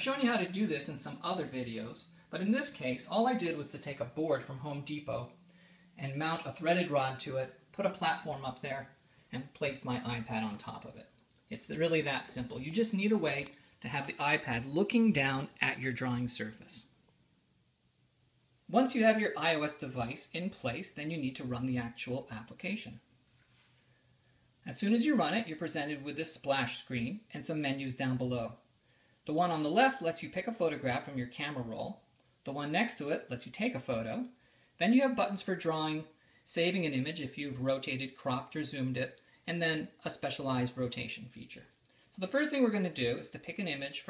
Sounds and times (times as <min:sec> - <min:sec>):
Speech: 0:00.0 - 0:05.4, 0:06.0 - 0:17.0, 0:18.7 - 0:23.1, 0:24.6 - 0:44.1.